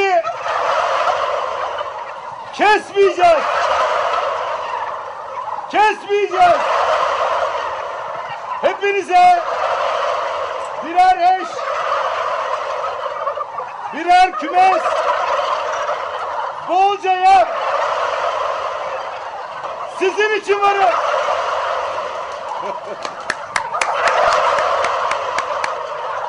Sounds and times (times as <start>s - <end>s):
Gobble: 0.0s - 26.2s.